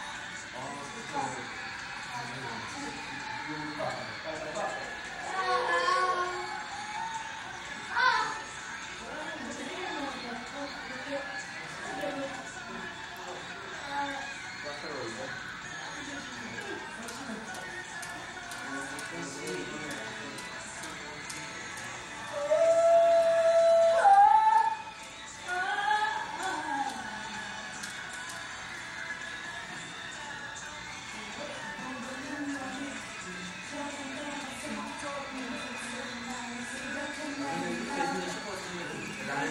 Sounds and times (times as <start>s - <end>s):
Male singing: 0.0s - 39.5s
Music: 0.0s - 39.5s.